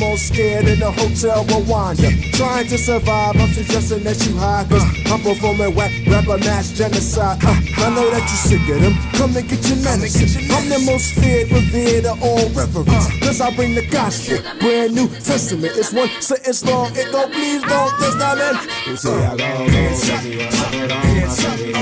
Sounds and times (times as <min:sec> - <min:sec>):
Music: 0:00.0 - 0:21.8
Rapping: 0:00.0 - 0:21.8.